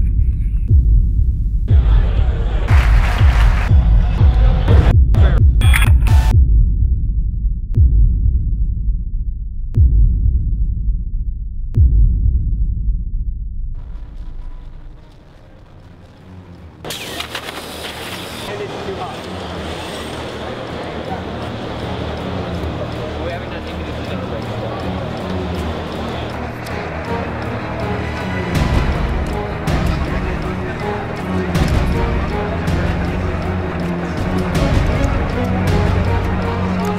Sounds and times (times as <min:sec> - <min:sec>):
Music: 0:00.0 - 0:36.9
Speech: 0:18.5 - 0:26.9.